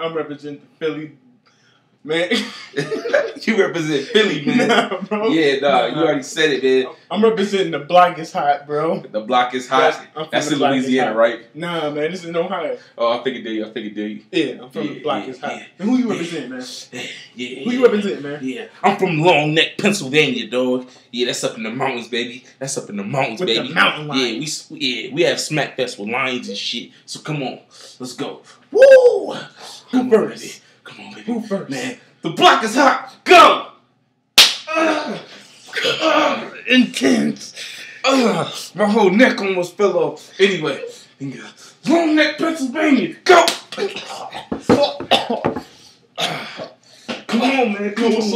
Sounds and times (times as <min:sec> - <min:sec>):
Speech: 0:02.1 - 0:28.5, 0:47.3 - 0:48.3.